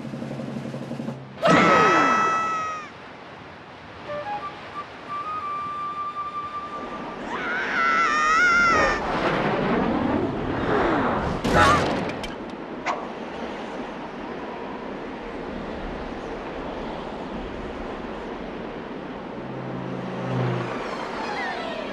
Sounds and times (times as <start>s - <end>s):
Wind: 0.0s - 21.9s.